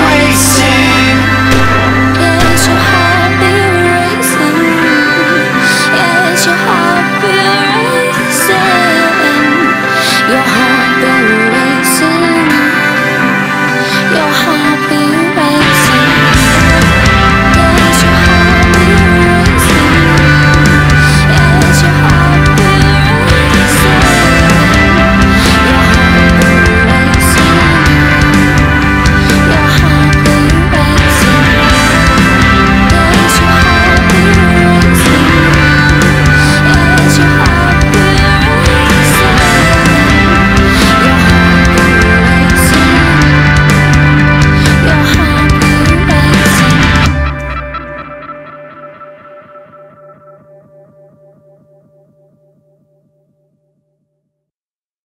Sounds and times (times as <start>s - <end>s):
Music: 0.0s - 54.5s.